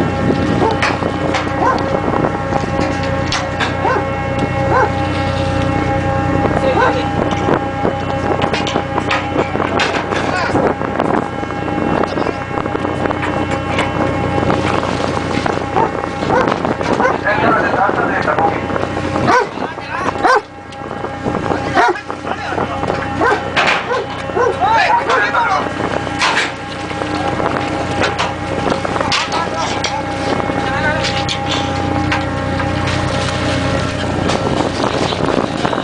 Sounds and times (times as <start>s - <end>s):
Boat, Water vehicle: 0.0s - 35.8s.